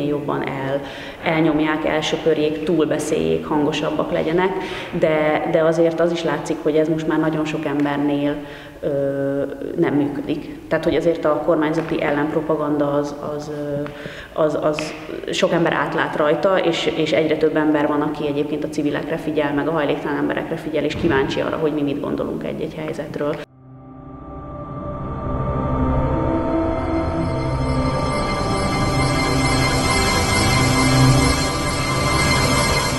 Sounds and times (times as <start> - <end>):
Speech: 0.0 - 23.5
Scary music: 23.4 - 32.9.